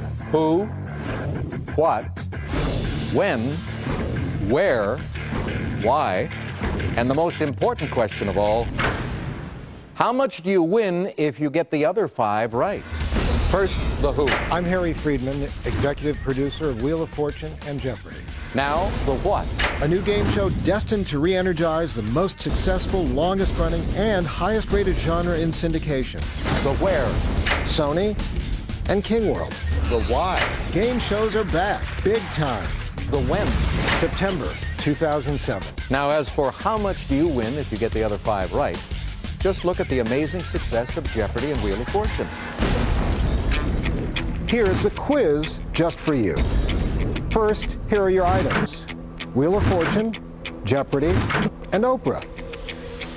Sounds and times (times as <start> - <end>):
Music: 0.0 - 10.1, 12.3 - 53.1.